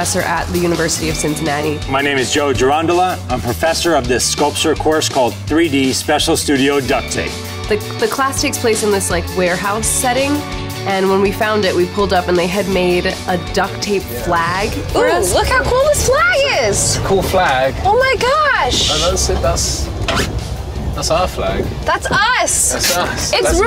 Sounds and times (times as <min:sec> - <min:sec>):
Music: 0:00.0 - 0:23.6.